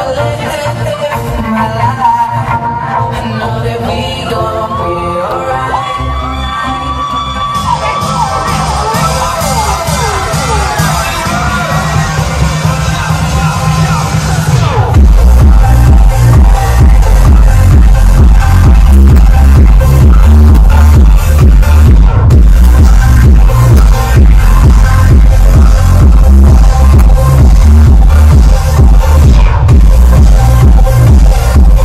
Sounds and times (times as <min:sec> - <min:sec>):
Disco: 0:00.0 - 0:31.8.